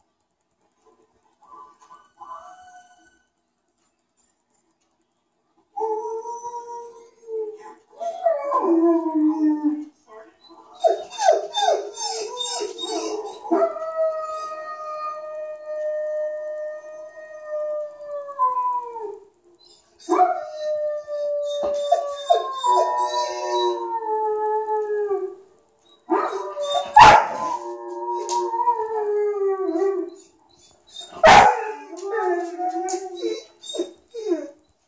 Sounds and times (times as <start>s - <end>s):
Howl: 1.9s - 3.3s, 5.8s - 9.9s, 10.5s - 34.6s
Bow-wow: 26.2s - 27.6s, 31.2s - 31.7s
Bark: 27.0s - 27.4s, 31.2s - 31.7s.